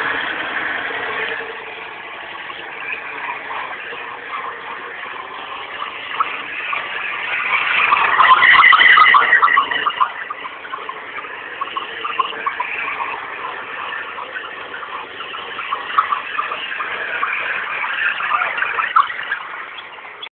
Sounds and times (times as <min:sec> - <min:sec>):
Car: 0:00.0 - 0:20.3.